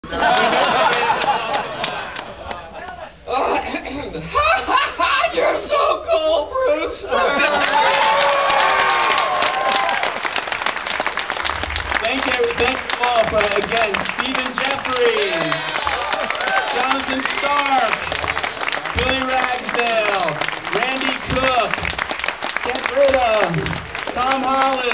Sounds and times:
Snicker: 0:00.0 - 0:03.0.

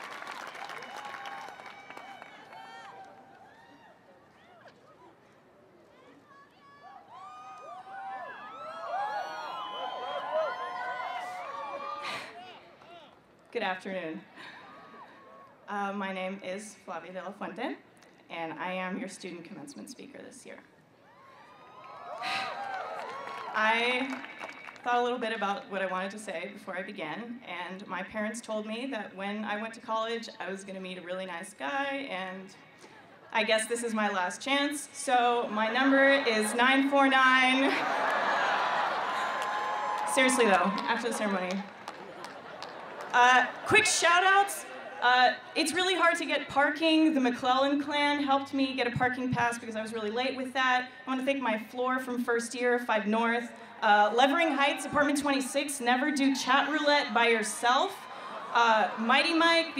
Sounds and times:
Female speech, woman speaking: 0:13.6 - 0:14.2, 0:15.7 - 0:20.6, 0:23.6 - 0:24.2, 0:24.9 - 0:32.5, 0:33.4 - 0:37.8, 0:40.1 - 0:41.6, 0:43.2 - 0:58.0, 0:58.6 - 0:59.7.

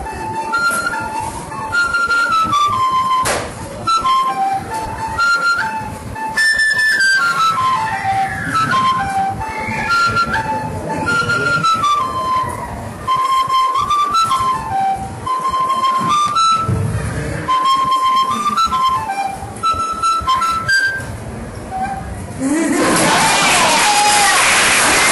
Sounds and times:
Flute: 0:00.0 - 0:25.1
Inside, large room or hall: 0:00.0 - 0:25.1.

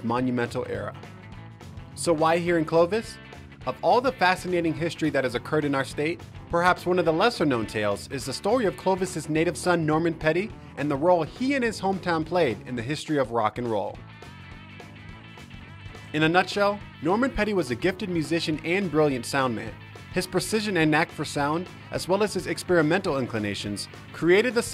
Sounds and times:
Speech: 0:00.0 - 0:01.0, 0:02.0 - 0:14.0, 0:16.1 - 0:24.7
Rock and roll: 0:00.0 - 0:24.7.

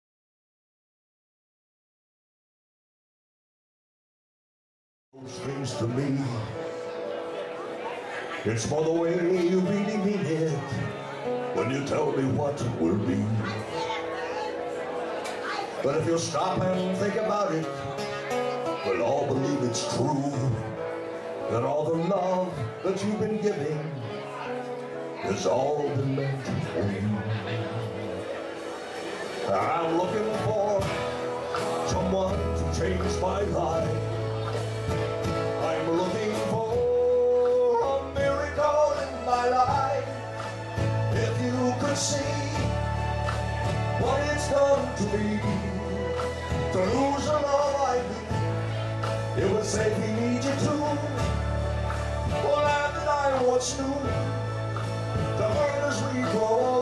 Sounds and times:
Music: 0:05.2 - 0:56.8.

